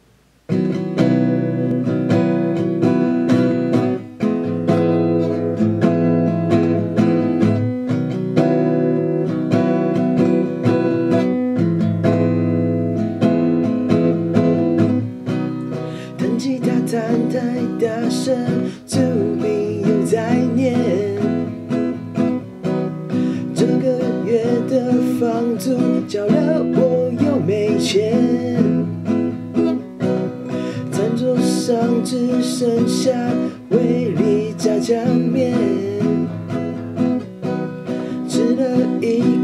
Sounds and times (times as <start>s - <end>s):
Acoustic guitar: 0.0s - 39.4s
Electric guitar: 0.4s - 39.4s
Strum: 0.5s - 39.4s.